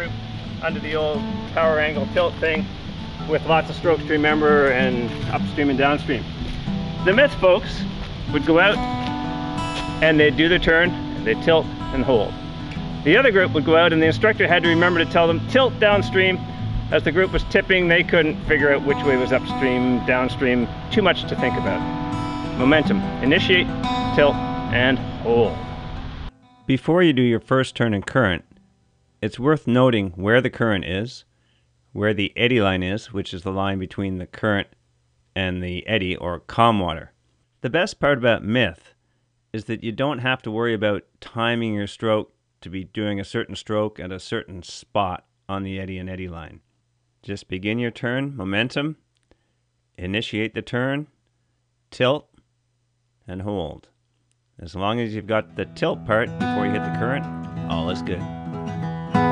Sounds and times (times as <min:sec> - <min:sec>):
Speech: 0:00.0 - 0:06.2, 0:07.0 - 0:08.8, 0:10.0 - 0:12.4, 0:13.0 - 0:21.8, 0:22.6 - 0:25.6, 0:26.7 - 0:28.4, 0:29.2 - 0:31.3, 0:31.9 - 0:34.8, 0:35.4 - 0:39.0, 0:39.6 - 0:46.6, 0:47.2 - 0:49.0, 0:50.0 - 0:51.2, 0:51.9 - 0:52.4, 0:53.3 - 0:54.0, 0:54.6 - 0:58.3
Music: 0:00.0 - 0:29.4, 0:55.0 - 0:59.3.